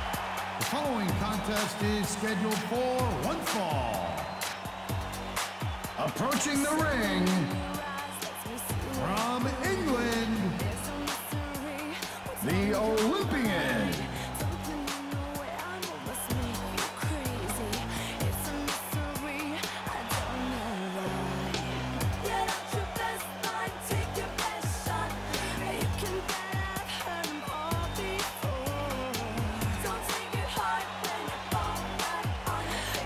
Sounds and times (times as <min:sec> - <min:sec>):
Music: 0:00.0 - 0:33.0
Speech: 0:00.7 - 0:04.1, 0:06.0 - 0:07.6, 0:08.8 - 0:10.8, 0:12.4 - 0:14.2.